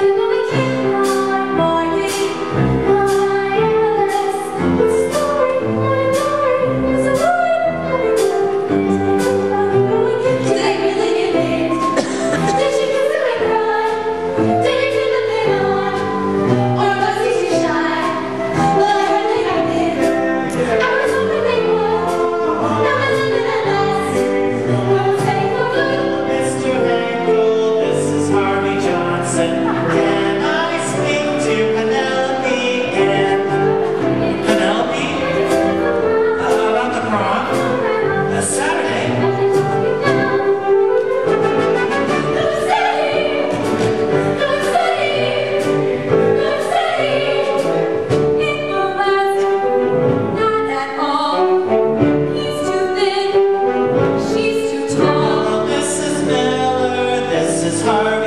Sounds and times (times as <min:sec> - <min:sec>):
Music: 0:00.0 - 0:58.2.